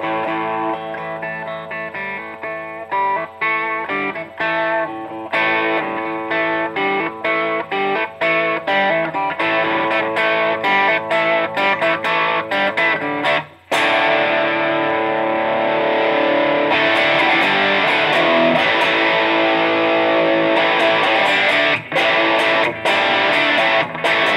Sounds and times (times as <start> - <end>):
Music: 0.0 - 24.3.